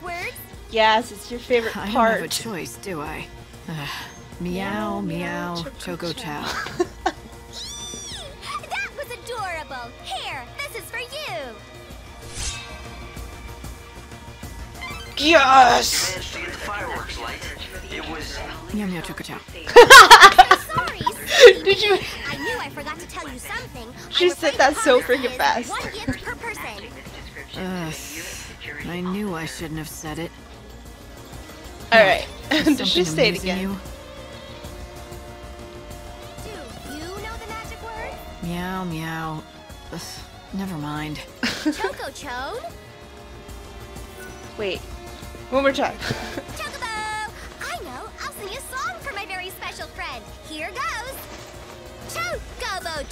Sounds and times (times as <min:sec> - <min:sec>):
Music: 0:00.0 - 0:53.1.